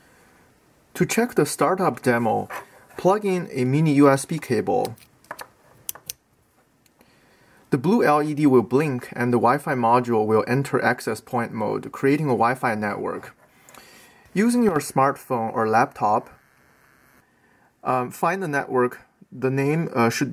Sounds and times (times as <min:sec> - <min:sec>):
Inside, small room: 0:00.0 - 0:20.3
Speech: 0:01.0 - 0:05.0, 0:07.7 - 0:13.4, 0:14.4 - 0:16.4, 0:17.8 - 0:20.3.